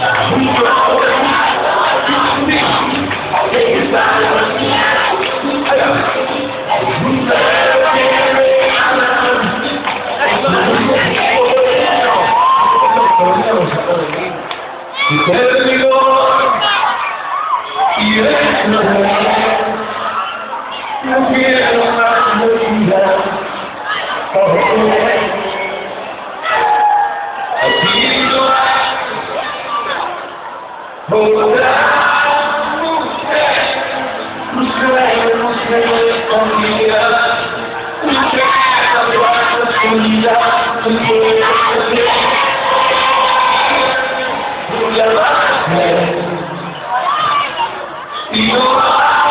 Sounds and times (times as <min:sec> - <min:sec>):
Music: 0:00.0 - 0:49.3.